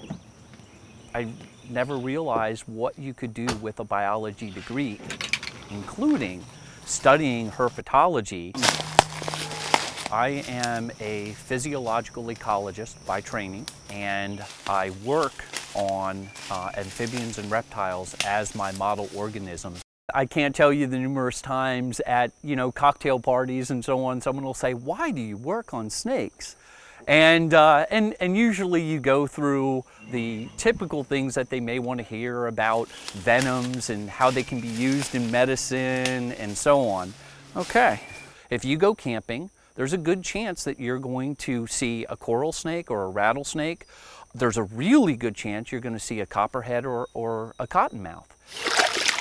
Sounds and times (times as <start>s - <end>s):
Outside, rural or natural: 0.0s - 49.2s
Speech: 1.2s - 5.0s, 5.7s - 8.7s, 10.1s - 48.3s.